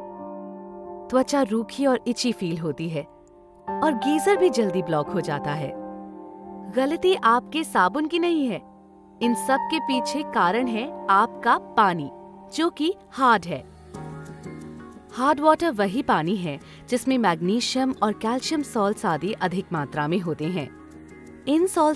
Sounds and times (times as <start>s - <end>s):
Music: 0.0s - 21.9s
Speech: 1.1s - 3.1s, 3.8s - 5.7s, 6.7s - 8.6s, 9.2s - 13.6s, 15.2s - 20.7s, 21.5s - 21.9s.